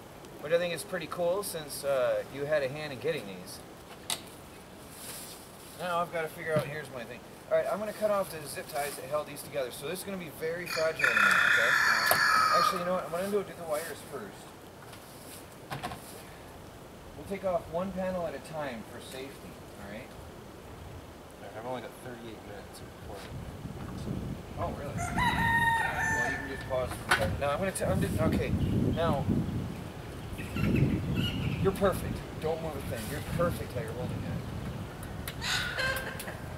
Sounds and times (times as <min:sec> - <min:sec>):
Fowl: 0:10.7 - 0:13.0, 0:35.4 - 0:36.5.